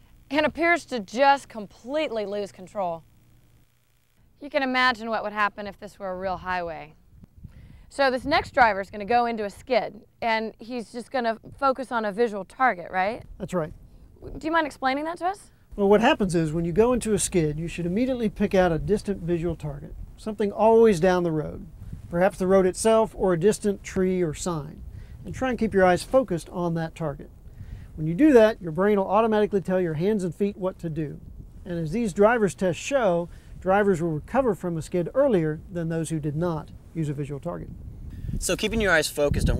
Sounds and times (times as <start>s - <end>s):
Speech: 0.3s - 3.0s, 4.4s - 6.9s, 7.9s - 27.3s, 28.0s - 37.7s, 38.4s - 39.6s.